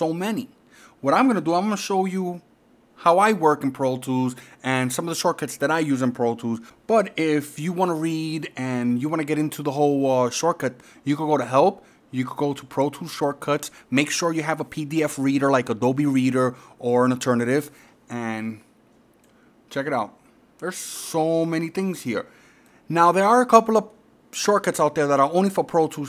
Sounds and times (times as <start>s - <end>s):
Speech: 0.0s - 18.7s, 19.7s - 22.3s, 22.9s - 26.0s.